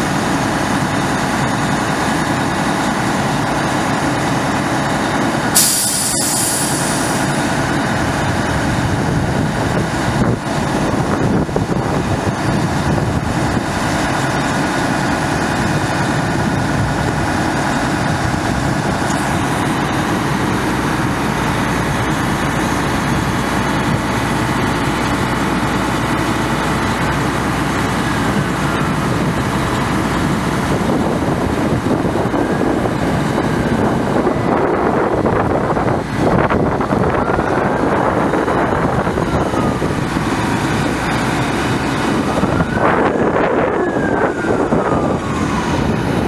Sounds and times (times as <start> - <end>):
Truck: 0.0 - 46.2.